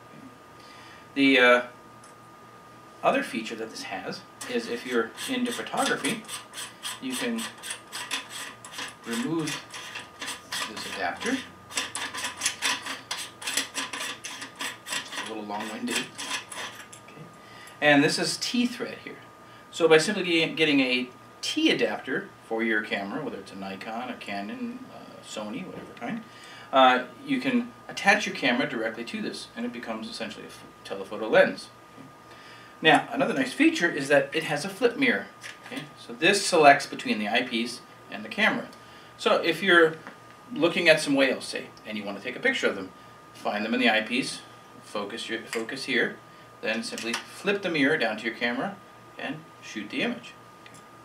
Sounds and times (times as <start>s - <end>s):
Inside, small room: 0.0s - 51.0s
Speech: 1.2s - 1.8s, 3.0s - 6.2s, 7.0s - 7.6s, 9.1s - 9.6s, 10.6s - 11.5s, 15.2s - 16.1s, 17.1s - 31.8s, 32.8s - 50.4s.